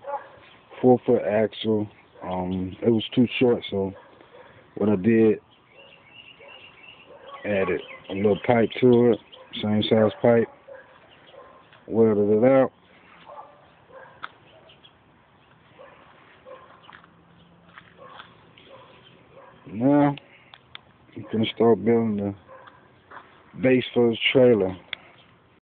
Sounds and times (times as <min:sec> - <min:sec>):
Speech: 0:00.8 - 0:04.0, 0:04.8 - 0:05.4, 0:07.4 - 0:10.5, 0:11.9 - 0:12.7, 0:19.7 - 0:20.2, 0:21.2 - 0:22.4, 0:23.6 - 0:24.9.